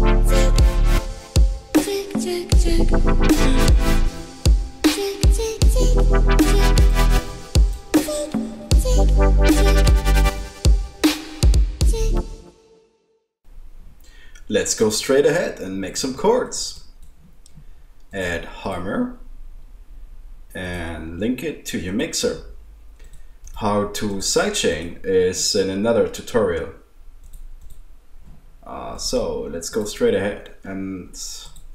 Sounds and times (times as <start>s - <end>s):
Speech: 14.5s - 16.9s, 18.1s - 19.2s, 20.5s - 22.6s, 23.6s - 26.9s, 28.6s - 31.6s.